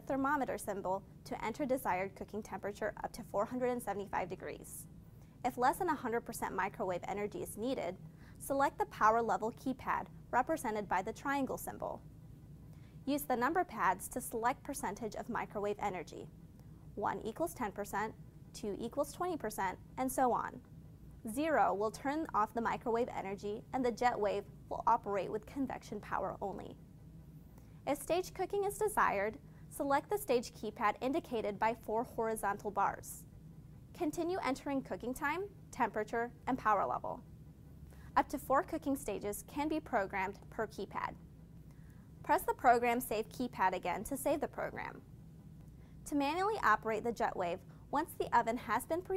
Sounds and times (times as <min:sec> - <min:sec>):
Speech: 0:00.0 - 0:12.0, 0:13.1 - 0:16.3, 0:17.0 - 0:20.6, 0:21.3 - 0:26.8, 0:27.9 - 0:33.3, 0:34.0 - 0:37.2, 0:38.2 - 0:41.2, 0:42.2 - 0:45.0, 0:46.0 - 0:49.1.